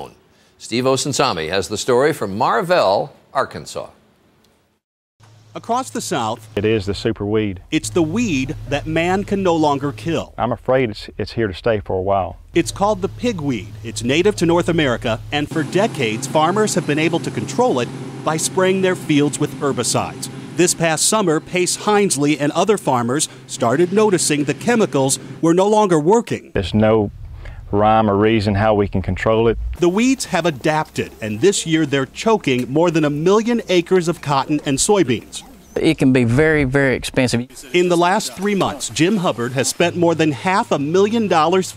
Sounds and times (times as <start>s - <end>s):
Speech: 0.0s - 4.0s, 5.6s - 27.1s, 27.7s - 41.7s.